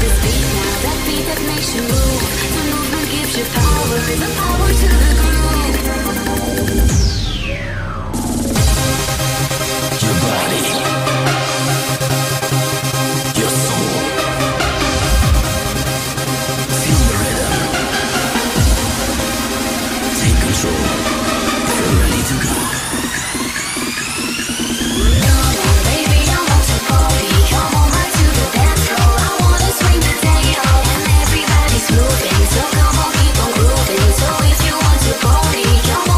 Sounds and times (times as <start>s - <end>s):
Techno: 0.0s - 36.1s.